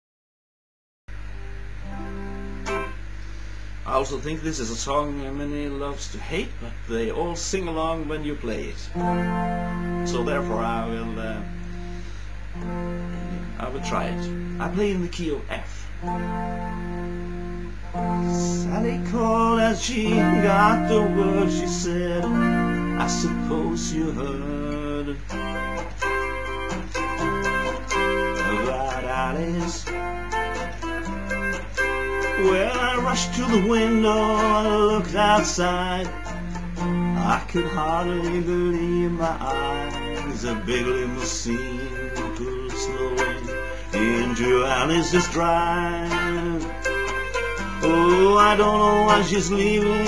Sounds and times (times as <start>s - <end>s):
Music: 1.1s - 3.6s, 8.6s - 50.0s.